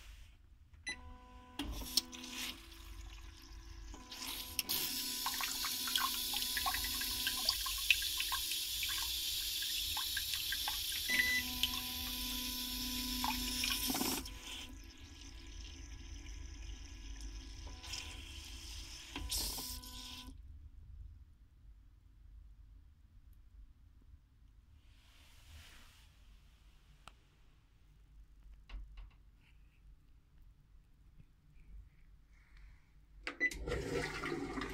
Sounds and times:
Toilet flush: 0:01.6 - 0:20.3, 0:33.4 - 0:34.7.

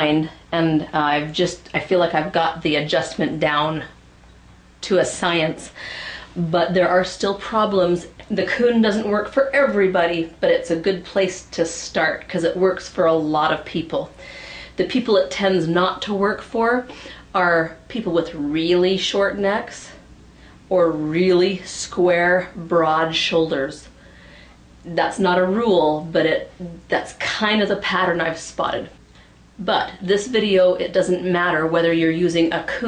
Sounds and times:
Speech: 0:00.0 - 0:04.0, 0:04.8 - 0:05.8, 0:06.4 - 0:14.2, 0:14.8 - 0:20.0, 0:20.7 - 0:23.9, 0:24.8 - 0:29.0, 0:29.6 - 0:32.8.

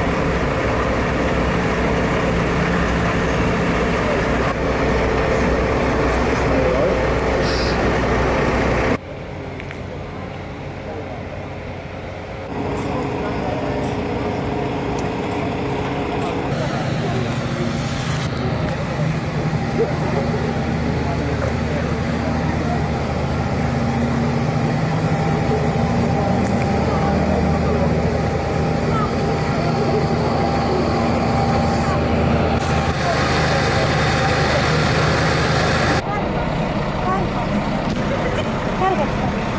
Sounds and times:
Speech: 0:12.6 - 0:23.3, 0:25.1 - 0:32.2, 0:36.0 - 0:39.5.

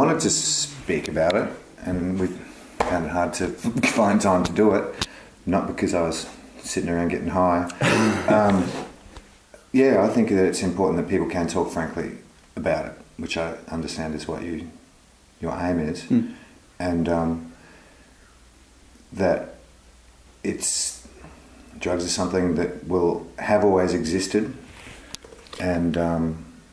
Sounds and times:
Speech: 0:00.0 - 0:08.9, 0:09.6 - 0:14.8, 0:15.4 - 0:17.5, 0:19.1 - 0:19.6, 0:20.4 - 0:21.1, 0:21.8 - 0:24.6, 0:25.6 - 0:26.5.

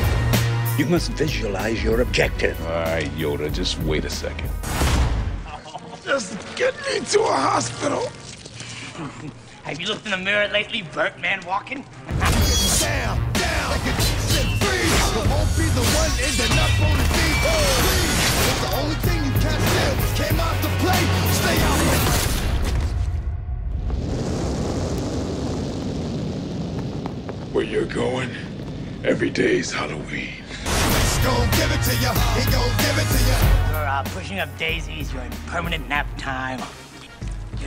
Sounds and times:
Music: 0:00.0 - 0:23.8, 0:30.7 - 0:37.6.

